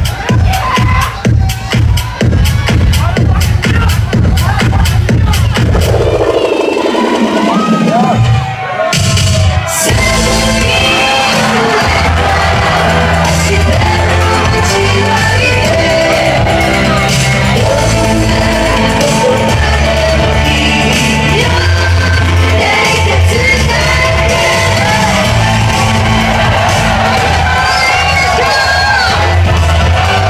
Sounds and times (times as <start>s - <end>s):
Shout: 0.0s - 4.5s, 6.4s - 18.0s, 21.4s - 30.2s
Inside, large room or hall: 0.0s - 30.2s
Music: 0.0s - 30.2s
Singing: 9.5s - 30.2s.